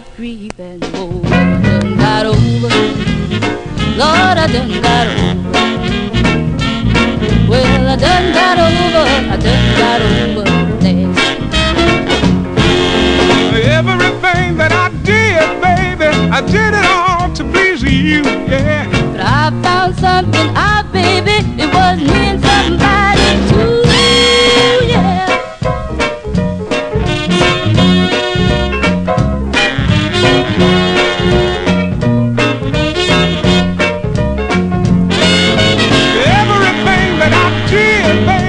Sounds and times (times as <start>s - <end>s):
Swing music: 0.0s - 38.4s.